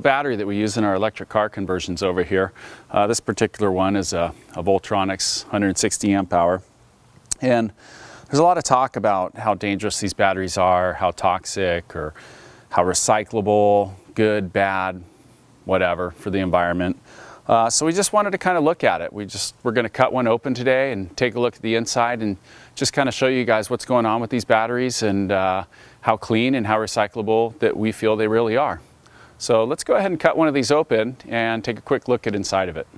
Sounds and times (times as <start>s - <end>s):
Speech: 0.0s - 6.7s, 7.3s - 15.1s, 15.7s - 28.8s, 29.4s - 32.9s.